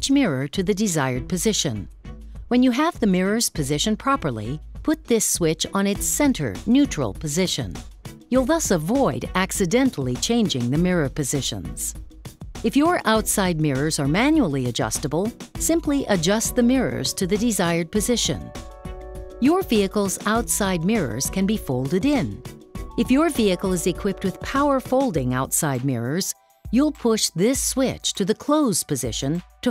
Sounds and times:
Speech: 0.0s - 1.9s, 2.5s - 12.0s, 12.7s - 18.5s, 19.4s - 22.4s, 23.0s - 29.7s
Music: 0.0s - 29.7s.

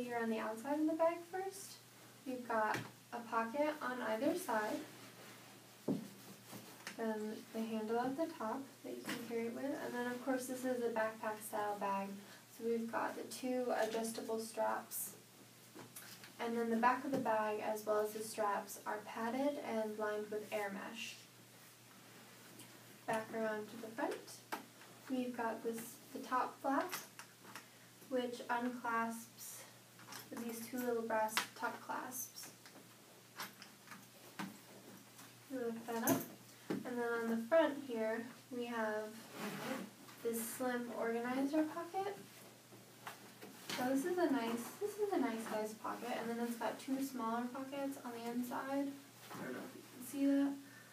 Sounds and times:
Speech: 0.0s - 4.9s, 7.0s - 15.2s, 16.4s - 21.3s, 23.1s - 24.5s, 25.1s - 27.1s, 28.1s - 32.6s, 35.5s - 42.3s, 43.7s - 50.6s.

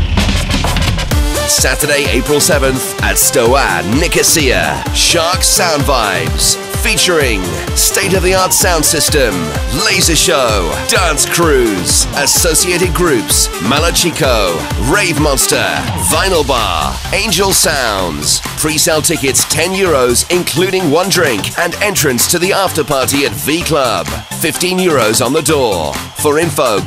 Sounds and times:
Background music: 0.0s - 26.8s
Speech: 1.5s - 26.8s.

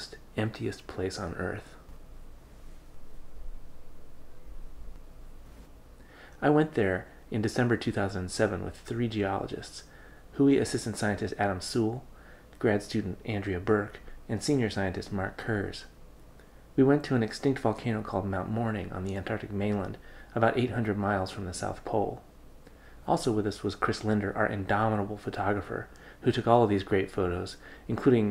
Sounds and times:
Speech: 0.0s - 1.8s, 6.4s - 16.0s, 16.8s - 22.3s, 23.0s - 28.3s.

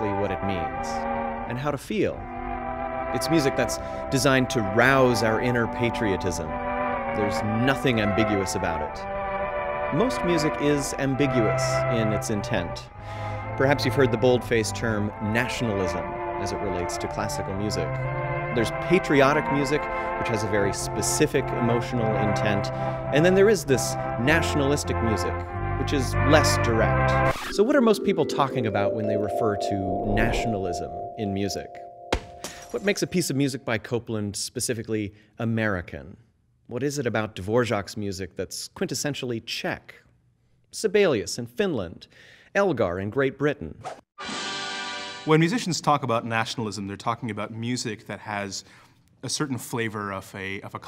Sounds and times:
Speech: 0.0s - 2.2s, 3.2s - 6.5s, 7.2s - 9.0s, 10.0s - 12.9s, 13.6s - 17.9s, 18.6s - 31.8s, 32.7s - 40.0s, 40.8s - 43.8s, 45.3s - 50.8s
Music: 0.0s - 33.5s, 44.2s - 46.1s.

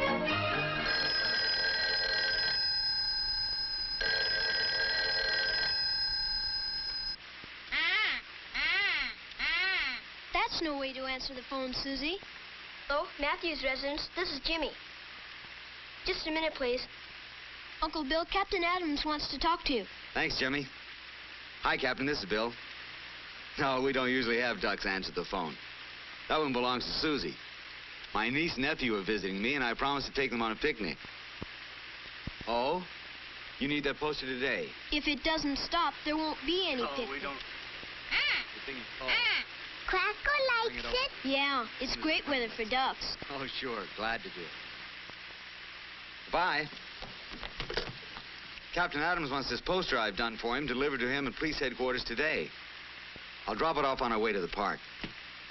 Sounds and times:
Telephone bell ringing: 0.3s - 7.2s
Speech: 10.3s - 12.2s, 12.9s - 14.8s, 16.0s - 16.9s, 17.8s - 20.7s, 32.4s - 32.9s, 33.6s - 37.4s, 38.6s - 39.3s, 39.9s - 44.5s, 53.5s - 54.8s.

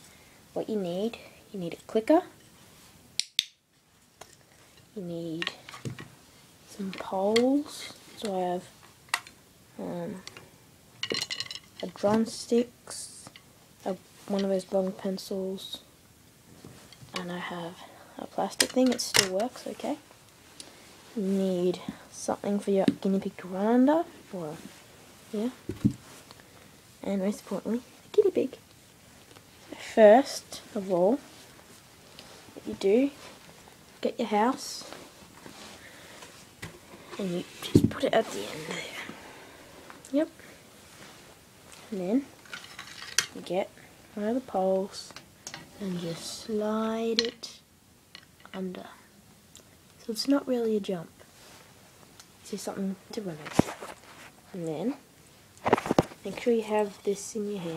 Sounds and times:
Speech: 0.6s - 2.4s, 5.0s - 5.6s, 6.7s - 8.7s, 9.8s - 10.2s, 11.8s - 15.9s, 17.1s - 20.0s, 21.2s - 24.7s, 25.3s - 25.6s, 27.0s - 28.6s, 29.7s - 31.3s, 32.6s - 33.2s, 34.0s - 35.0s, 37.2s - 39.1s, 40.1s - 40.4s, 41.9s - 42.3s, 43.3s - 45.2s, 45.8s - 47.7s, 48.5s - 49.1s, 50.0s - 51.2s, 52.4s - 53.6s, 54.5s - 55.0s, 56.2s - 57.7s.

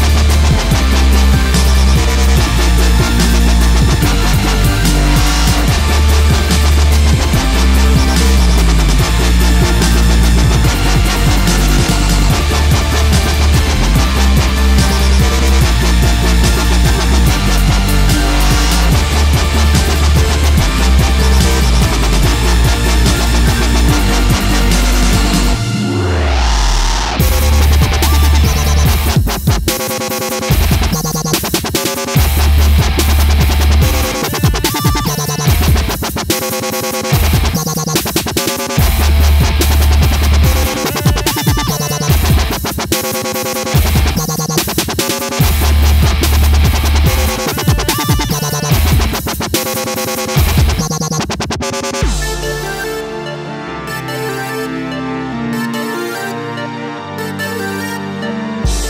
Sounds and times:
Sampler: 0.0s - 58.8s.

